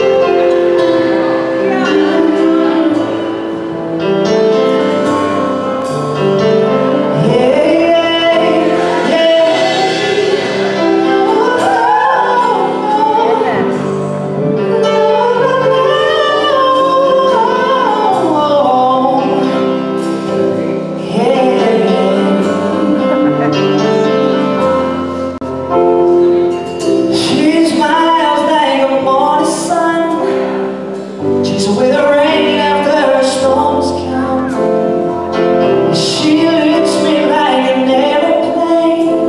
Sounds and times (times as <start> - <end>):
Male singing: 0.0 - 3.6, 7.2 - 20.0, 20.9 - 24.4, 27.0 - 39.2
Music: 0.0 - 39.2.